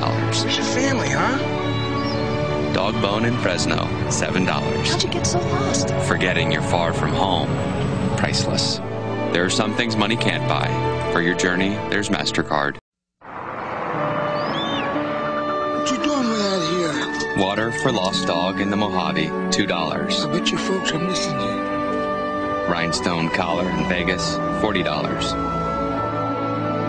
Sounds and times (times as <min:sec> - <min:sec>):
Speech: 0:00.0 - 0:01.4, 0:02.8 - 0:07.5, 0:08.2 - 0:08.8, 0:09.4 - 0:12.8, 0:15.9 - 0:21.6, 0:22.7 - 0:25.4
Music: 0:00.0 - 0:12.8, 0:13.9 - 0:26.8.